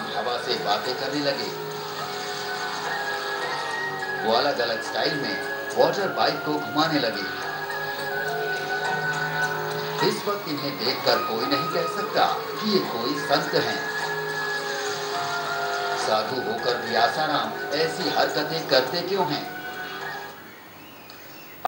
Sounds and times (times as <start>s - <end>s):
Speech: 0.0s - 1.6s, 4.2s - 7.4s, 10.0s - 13.9s, 16.0s - 19.5s
Music: 0.0s - 21.6s.